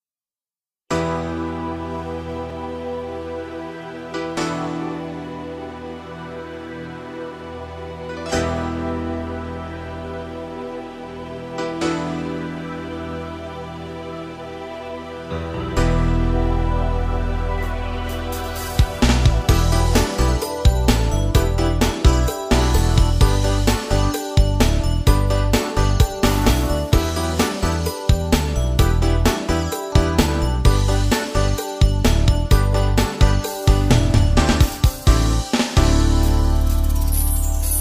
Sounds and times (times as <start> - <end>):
Rhythm and blues: 0.9 - 37.8.